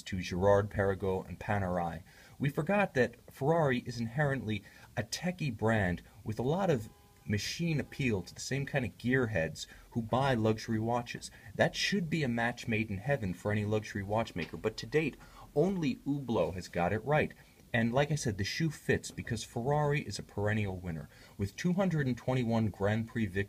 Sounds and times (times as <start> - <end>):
Speech: 0.0 - 23.4.